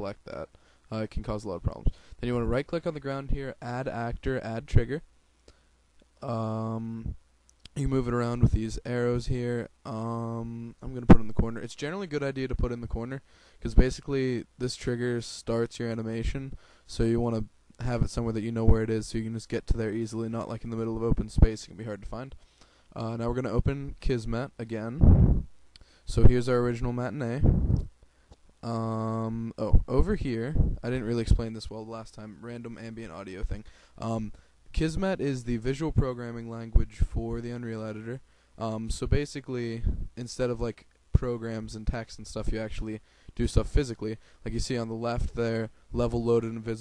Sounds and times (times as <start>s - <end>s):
Speech: 0.0s - 5.1s, 6.2s - 22.4s, 23.0s - 25.0s, 26.1s - 27.5s, 28.6s - 46.8s.